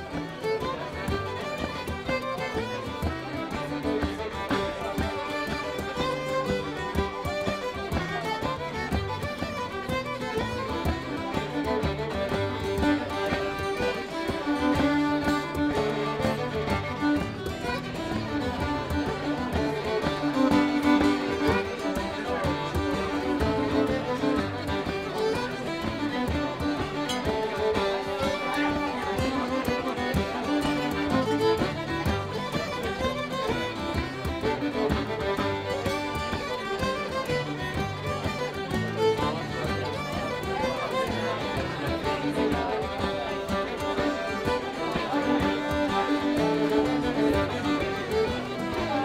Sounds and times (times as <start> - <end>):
Music: 0.0 - 49.0.